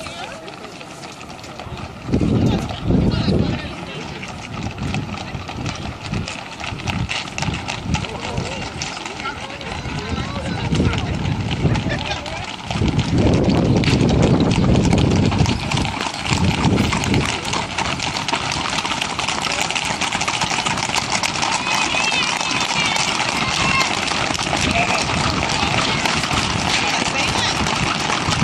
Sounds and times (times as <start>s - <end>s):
Speech: 0.0s - 6.4s, 8.0s - 12.6s, 21.5s - 24.0s, 24.6s - 27.8s
Clip-clop: 0.0s - 28.4s.